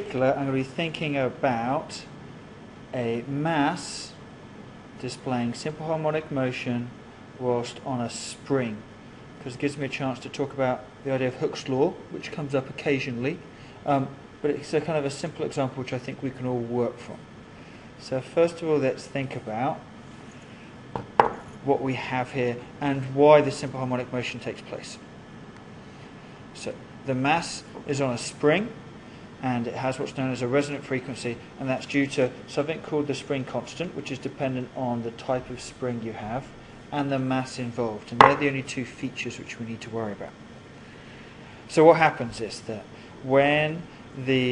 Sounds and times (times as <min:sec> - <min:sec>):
Speech: 0:00.0 - 0:02.2, 0:02.9 - 0:04.2, 0:05.0 - 0:17.2, 0:18.0 - 0:19.9, 0:21.6 - 0:25.1, 0:26.6 - 0:28.8, 0:29.4 - 0:40.4, 0:41.7 - 0:44.5.